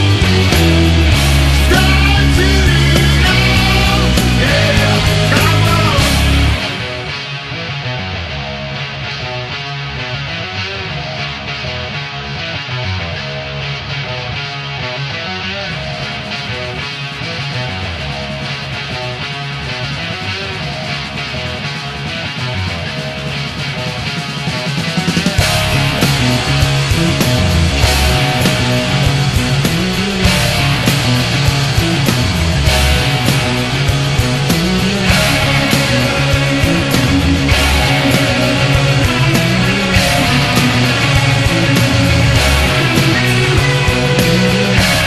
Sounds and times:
Music: 0:00.0 - 0:45.0.

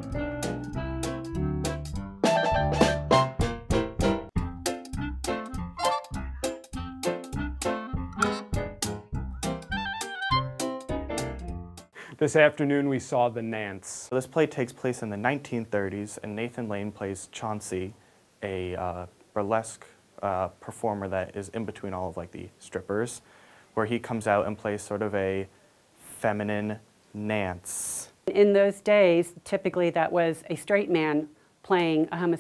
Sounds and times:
Speech: 0:12.2 - 0:23.2, 0:23.8 - 0:32.4.

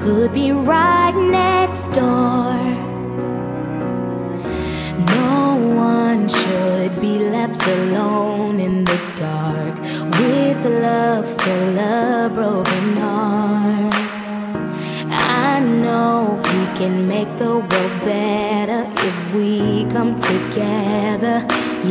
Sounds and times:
Music: 0:00.0 - 0:21.9.

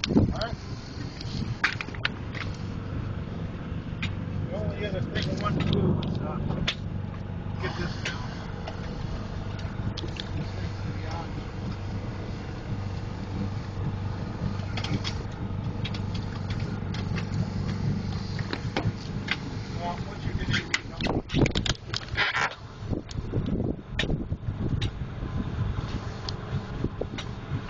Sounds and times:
Boat, Water vehicle: 0:00.0 - 0:27.6
Speech: 0:00.3 - 0:00.6, 0:04.5 - 0:06.7, 0:10.4 - 0:11.4, 0:19.8 - 0:21.3.

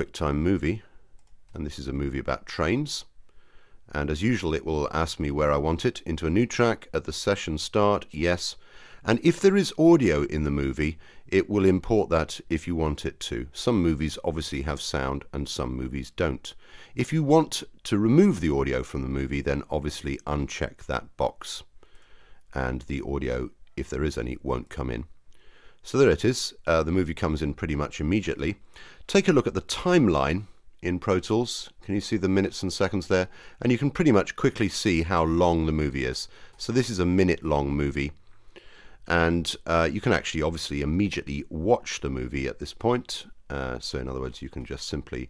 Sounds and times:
Speech: 0:00.0 - 0:00.9, 0:01.5 - 0:03.1, 0:03.9 - 0:21.7, 0:22.5 - 0:25.1, 0:25.8 - 0:38.2, 0:39.1 - 0:45.3.

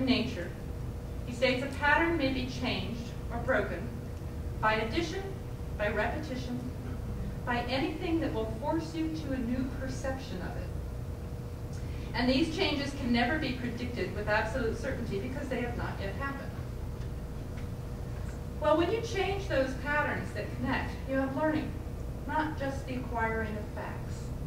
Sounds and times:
Female speech, woman speaking: 0:00.0 - 0:00.6, 0:01.3 - 0:04.0, 0:04.6 - 0:06.8, 0:07.5 - 0:10.7, 0:12.2 - 0:16.6, 0:18.6 - 0:24.3
Narration, monologue: 0:00.0 - 0:24.4.

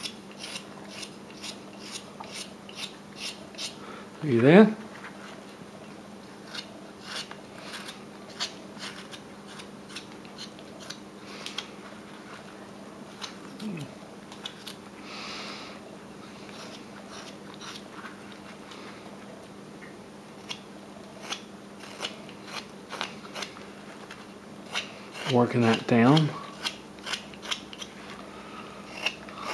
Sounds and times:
Speech: 0:04.2 - 0:04.8, 0:25.3 - 0:26.4.

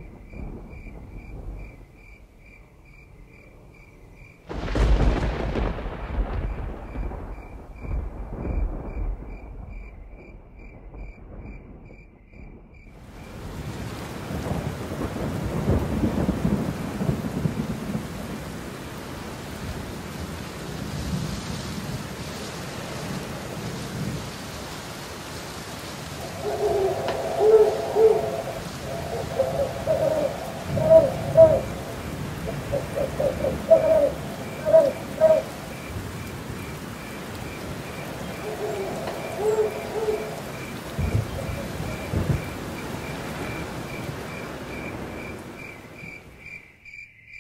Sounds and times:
Thunder: 0:00.0 - 0:02.0, 0:04.5 - 0:18.6, 0:26.2 - 0:36.7, 0:37.7 - 0:45.3
Rain: 0:00.0 - 0:47.4.

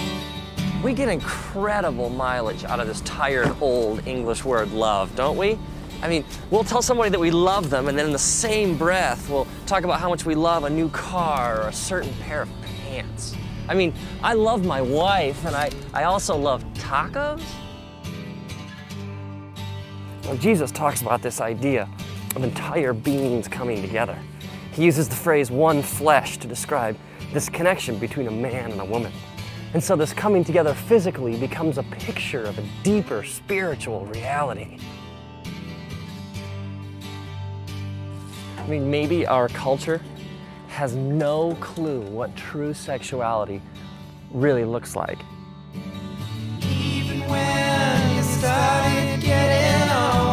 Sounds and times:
Music: 0:00.0 - 0:50.3
Speech: 0:00.8 - 0:17.6, 0:20.2 - 0:24.2, 0:24.8 - 0:34.8, 0:38.6 - 0:40.1, 0:40.7 - 0:43.6, 0:44.3 - 0:45.3.

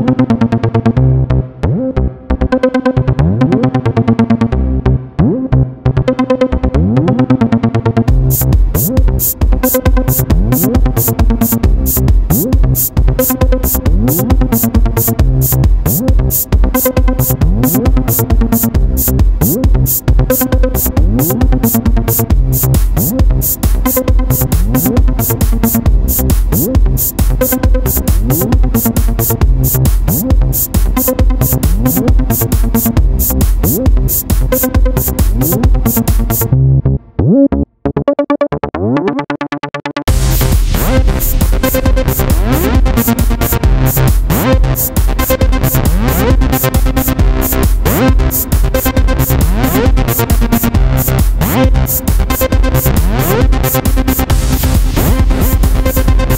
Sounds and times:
Music: 0:00.0 - 0:56.3.

